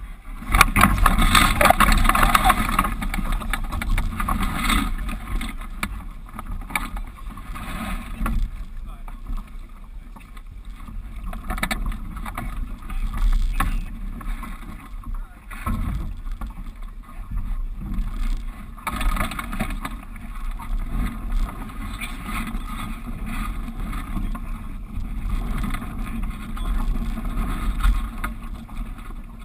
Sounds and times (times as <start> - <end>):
Rowboat, canoe, kayak: 0.0 - 29.4.